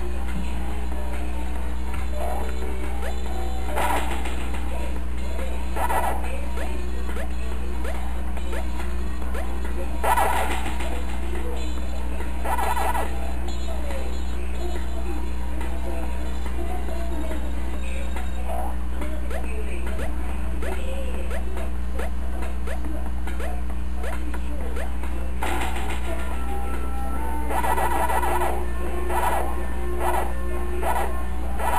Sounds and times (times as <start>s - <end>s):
Music: 0.0s - 31.7s.